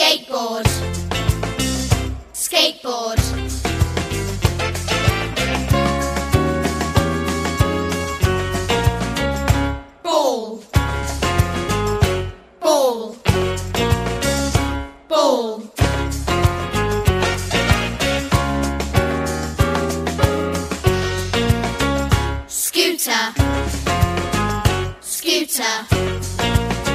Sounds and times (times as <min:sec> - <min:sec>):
Music: 0:00.0 - 0:26.9.